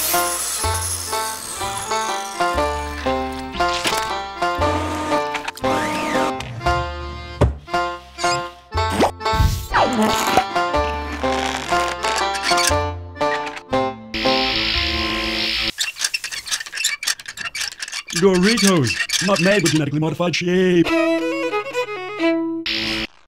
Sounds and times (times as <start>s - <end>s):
Music: 0.0s - 15.7s, 20.6s - 23.1s
Speech: 18.1s - 20.9s.